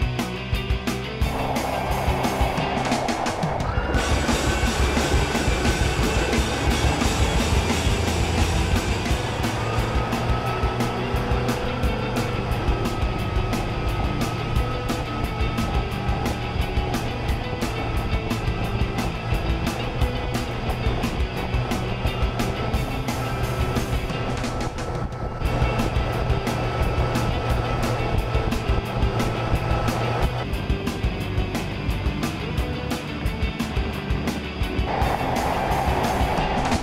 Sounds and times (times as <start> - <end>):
Music: 0.0 - 36.8
Motorboat, speedboat: 1.3 - 30.5, 31.6 - 36.8.